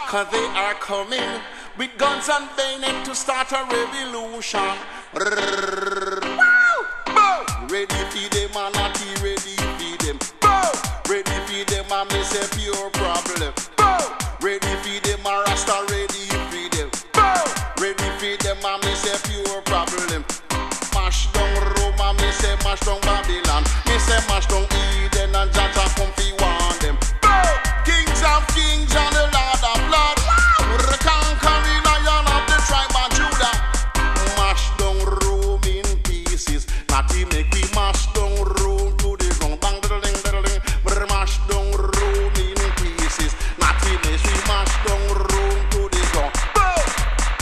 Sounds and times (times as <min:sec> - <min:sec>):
Hip hop music: 0:00.0 - 0:47.4.